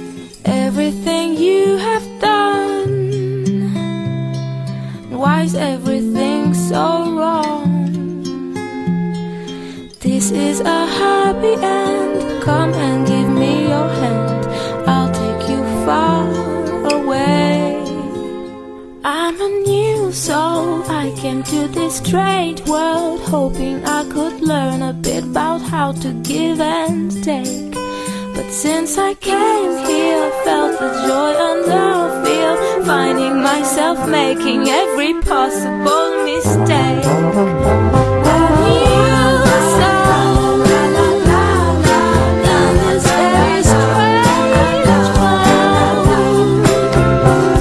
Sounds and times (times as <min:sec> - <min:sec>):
Music: 0:00.0 - 0:47.6.